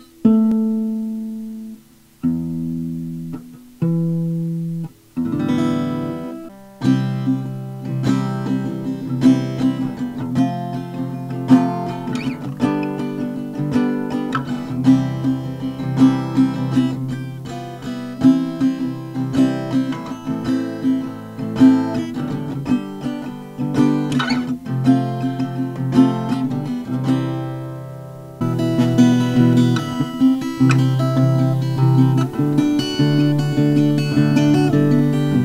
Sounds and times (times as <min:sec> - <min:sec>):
Acoustic guitar: 0:00.0 - 0:35.4.